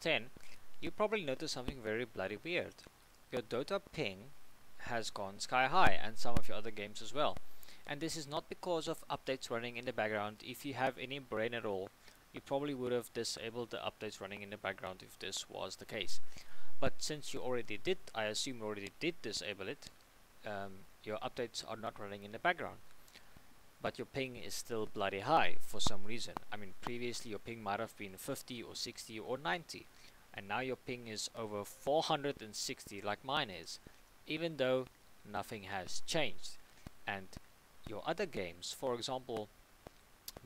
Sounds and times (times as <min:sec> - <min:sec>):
Speech: 0:00.0 - 0:16.2, 0:16.8 - 0:22.8, 0:23.8 - 0:39.5.